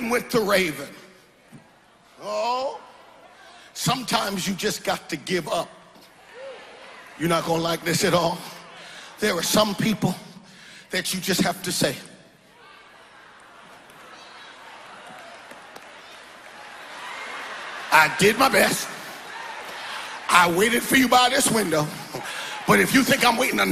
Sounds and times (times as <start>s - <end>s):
Speech: 0.0s - 1.0s, 10.9s - 12.1s, 17.9s - 19.0s, 20.3s - 22.0s, 22.7s - 23.7s.